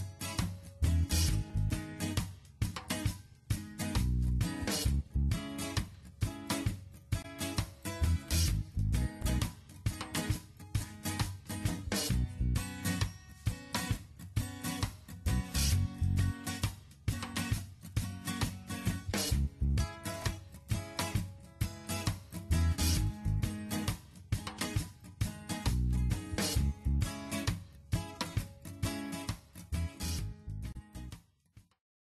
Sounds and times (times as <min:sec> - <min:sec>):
Music: 0:00.0 - 0:31.8.